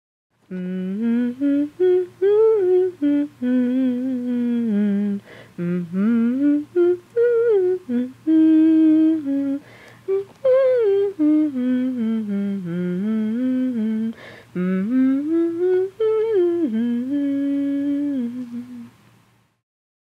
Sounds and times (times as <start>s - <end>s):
Humming: 0.5s - 19.0s.